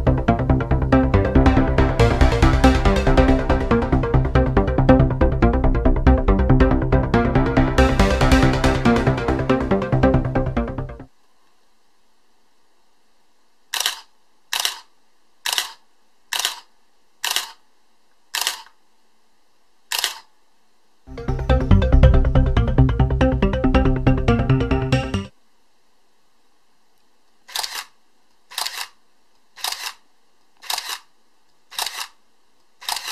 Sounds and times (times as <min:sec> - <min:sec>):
Music: 0:00.0 - 0:11.1, 0:21.1 - 0:25.3.